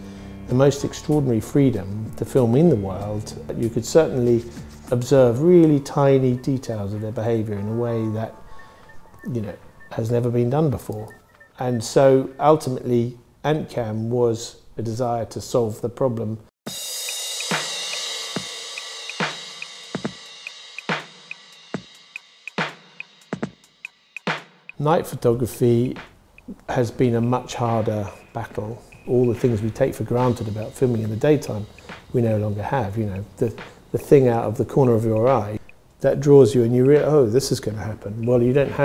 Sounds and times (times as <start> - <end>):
Speech: 0.5 - 8.4, 9.2 - 16.4, 24.8 - 38.8
Hi-hat: 16.7 - 24.5, 28.9 - 35.8.